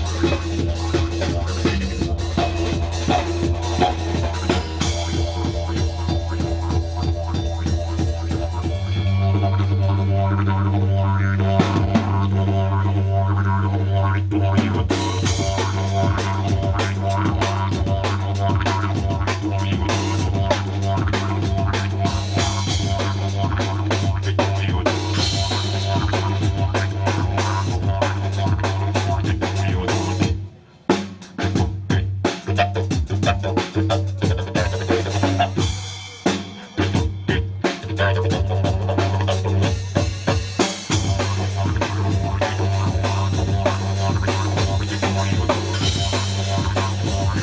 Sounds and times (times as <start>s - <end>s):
Didgeridoo: 0.0s - 47.4s.